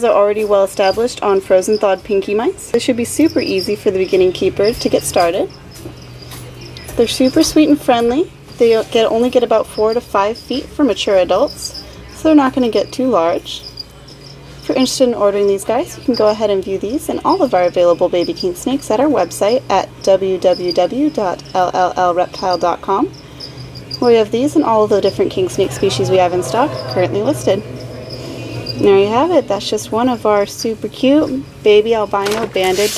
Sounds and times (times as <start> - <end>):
Speech: 6.9 - 13.7, 14.7 - 23.1, 24.0 - 27.6, 28.8 - 32.9
Animal: 20.4 - 29.2.